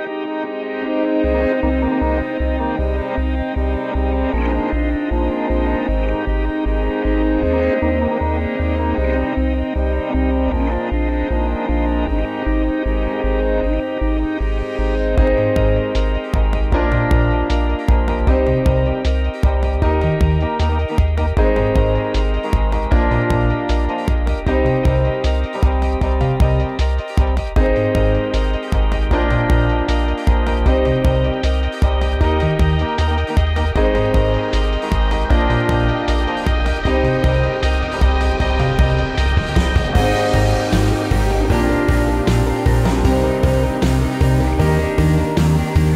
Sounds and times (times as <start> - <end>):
Music: 0.0 - 45.9.